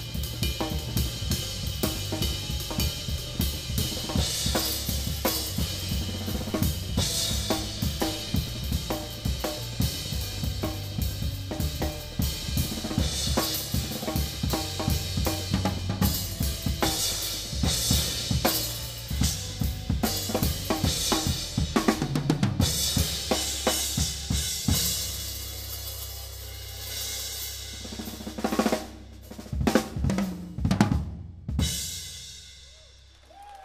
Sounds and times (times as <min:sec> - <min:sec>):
Drum: 0:00.0 - 0:32.8
Cymbal: 0:00.0 - 0:33.1
Drum kit: 0:00.0 - 0:33.6.